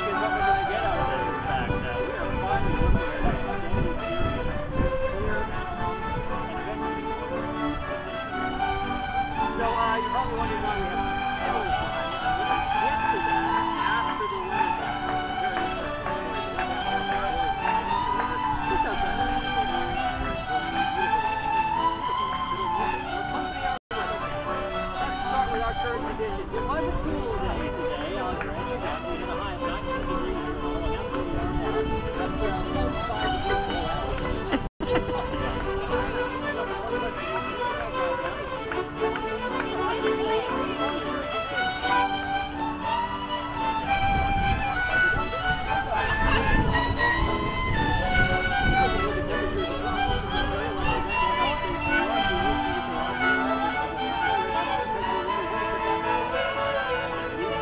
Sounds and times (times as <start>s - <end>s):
Speech: 0.0s - 8.6s, 9.2s - 57.6s
Violin, fiddle: 0.0s - 57.6s.